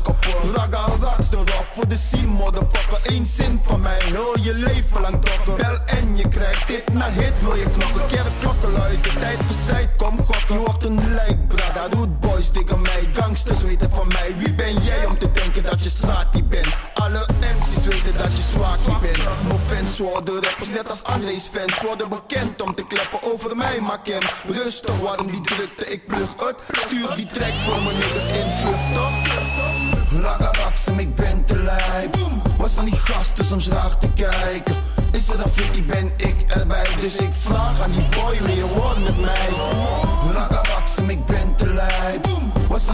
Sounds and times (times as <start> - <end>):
Hip hop music: 0.0 - 42.9
Reggae: 0.0 - 42.9.